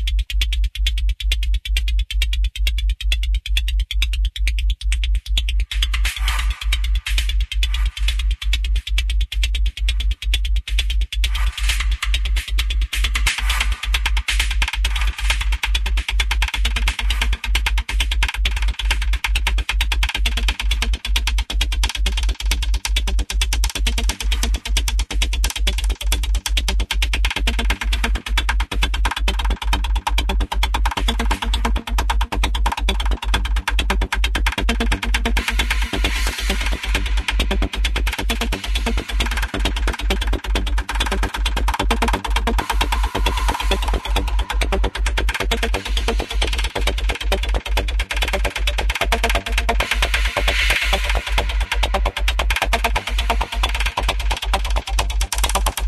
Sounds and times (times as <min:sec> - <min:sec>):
Electronic music: 0:00.0 - 0:55.8.